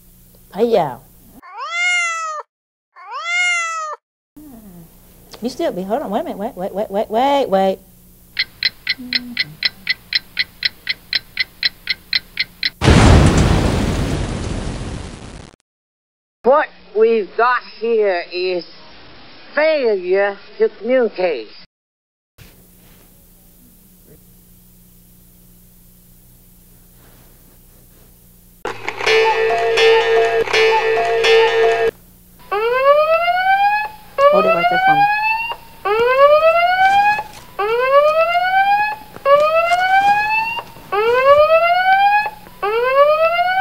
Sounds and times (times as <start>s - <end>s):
Speech: 0.5s - 1.1s, 4.4s - 7.8s, 34.2s - 35.1s.